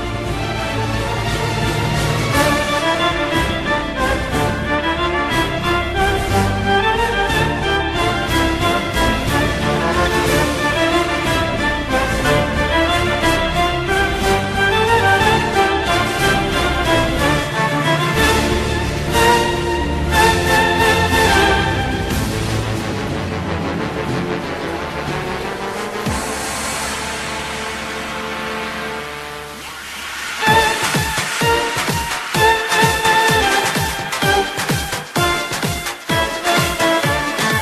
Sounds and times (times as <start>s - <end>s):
Pop music: 0.0s - 37.6s.